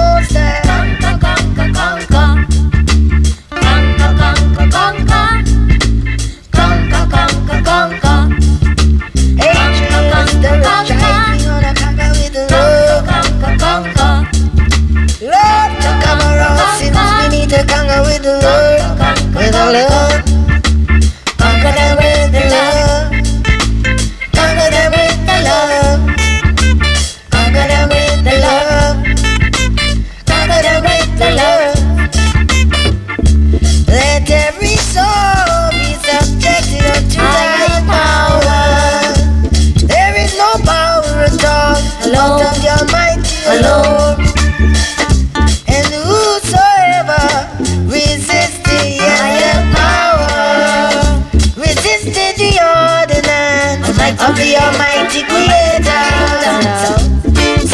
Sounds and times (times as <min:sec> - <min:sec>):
Funk: 0:00.0 - 0:57.7
Ska: 0:00.0 - 0:57.7
Soul music: 0:00.0 - 0:57.7.